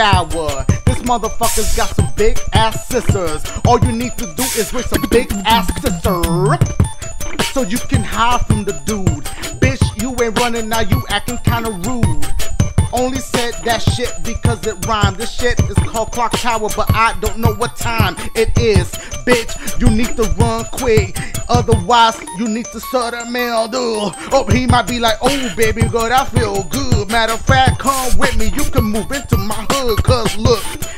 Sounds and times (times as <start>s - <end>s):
Music: 0.0s - 30.9s.